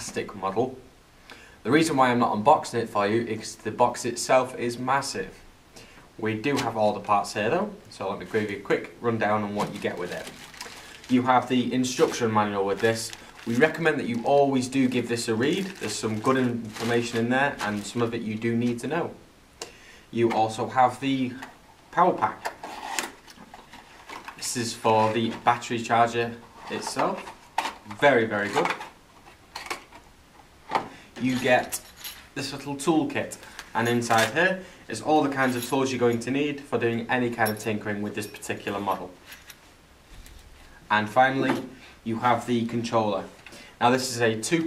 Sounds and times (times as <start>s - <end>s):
Speech: 0.0s - 0.9s, 1.6s - 5.4s, 6.2s - 10.4s, 11.1s - 19.2s, 20.1s - 22.5s, 24.4s - 28.8s, 31.2s - 31.8s, 32.4s - 39.2s, 40.9s - 44.6s.